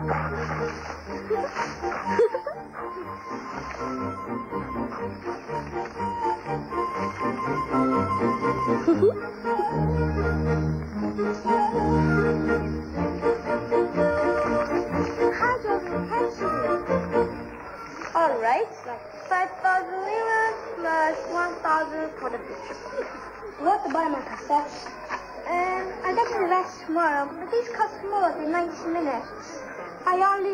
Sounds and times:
Music: 0.0 - 19.3.

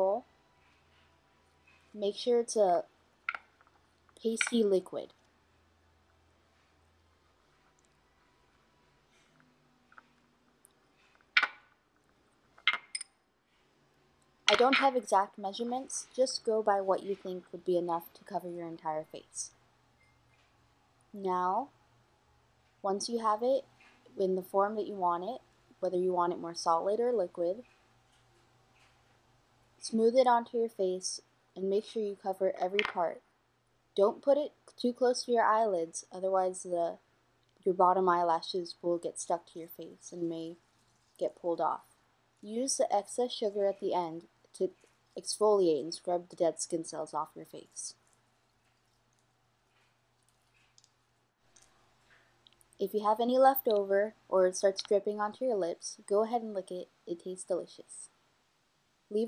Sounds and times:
Speech: 0.0 - 0.2, 2.0 - 2.9, 4.2 - 5.1, 14.5 - 19.5, 21.2 - 21.7, 22.8 - 27.6, 29.8 - 33.2, 34.0 - 37.0, 37.6 - 40.6, 41.2 - 48.0, 52.8 - 58.1
Inside, small room: 0.0 - 59.2.

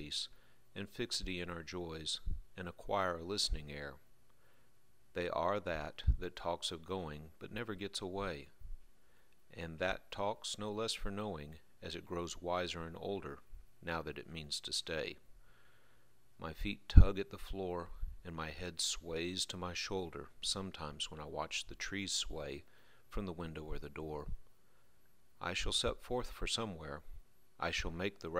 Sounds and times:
Speech: 0.0 - 4.0, 5.1 - 8.6, 9.5 - 15.2, 16.4 - 24.4, 25.4 - 28.3.

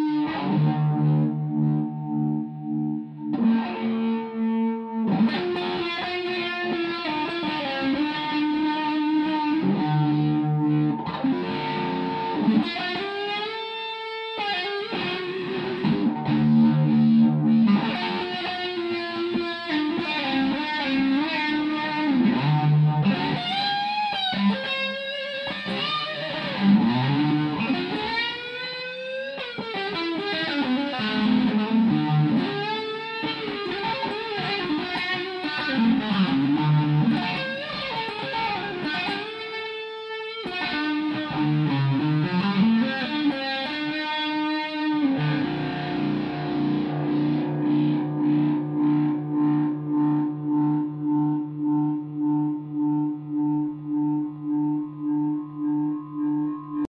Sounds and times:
Distortion: 0.0 - 56.9
Effects unit: 0.0 - 56.9
Guitar: 0.0 - 56.9.

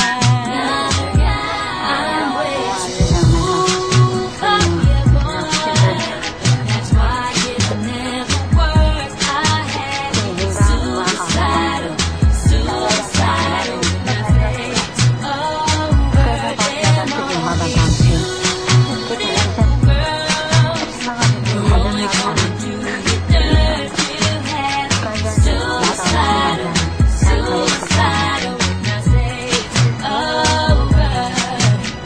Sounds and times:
Speech: 0.0 - 7.9, 9.5 - 28.7
Music: 0.0 - 32.0.

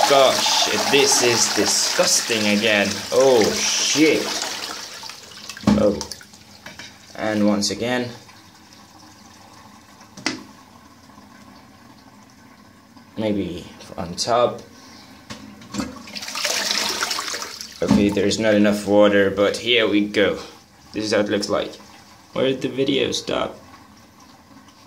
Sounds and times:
Toilet flush: 0.0 - 24.8
Water: 0.0 - 24.8.

